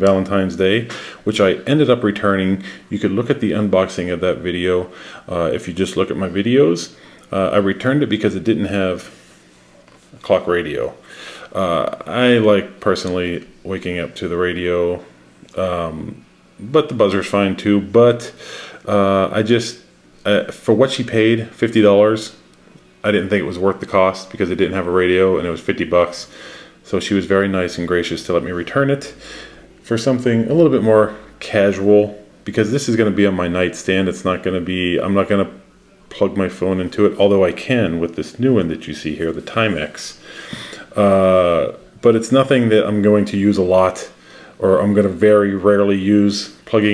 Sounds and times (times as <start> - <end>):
Speech: 0.0 - 9.2, 10.1 - 29.2, 29.8 - 40.2, 40.9 - 46.9.